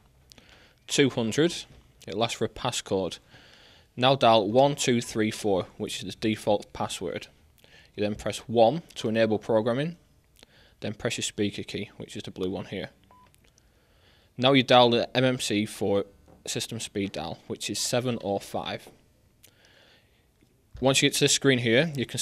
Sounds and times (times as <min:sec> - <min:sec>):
Speech: 0:00.9 - 0:03.2, 0:04.0 - 0:07.4, 0:08.0 - 0:10.0, 0:10.8 - 0:13.0, 0:14.4 - 0:19.0, 0:20.8 - 0:22.2.